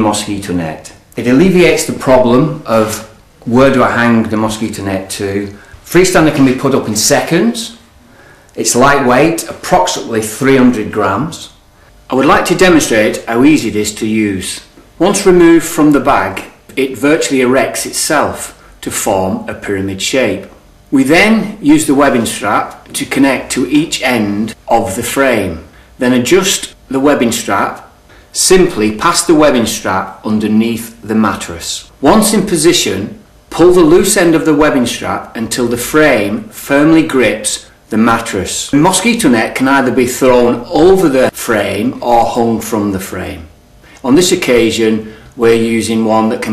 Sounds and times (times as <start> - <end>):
Speech: 0.0 - 7.8, 8.6 - 46.5.